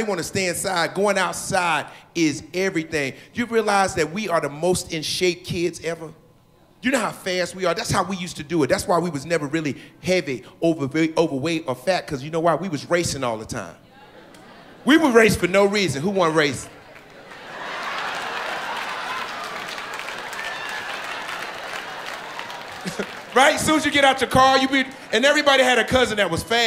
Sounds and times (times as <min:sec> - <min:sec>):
Speech: 0:00.0 - 0:06.2, 0:06.8 - 0:13.8, 0:14.9 - 0:16.7, 0:23.4 - 0:26.6.